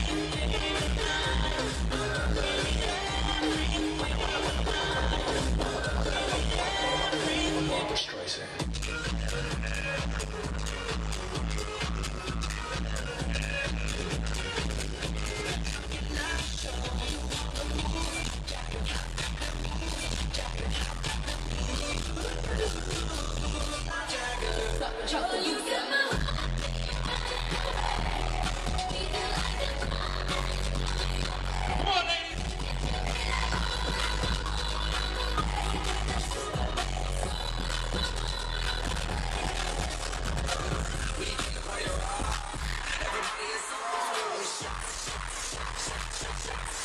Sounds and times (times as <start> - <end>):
Music: 0.0 - 46.8
Speech: 31.8 - 32.4.